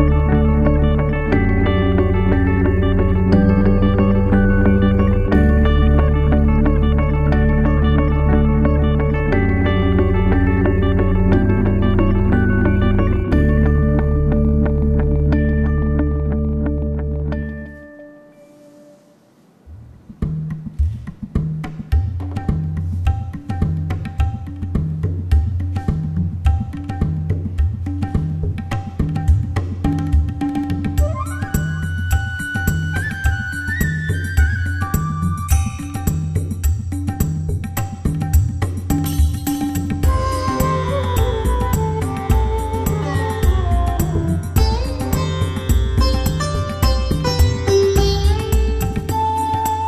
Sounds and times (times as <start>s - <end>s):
Music: 0.0s - 49.8s.